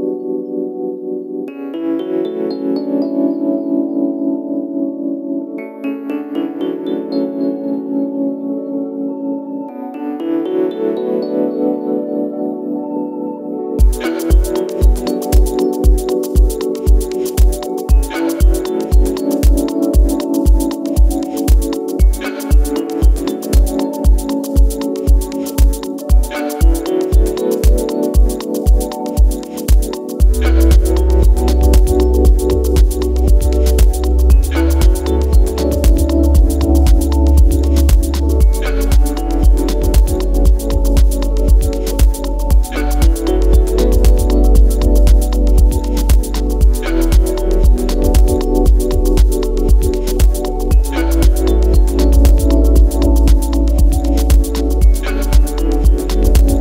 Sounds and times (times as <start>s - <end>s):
Synthesizer: 0.0s - 56.6s.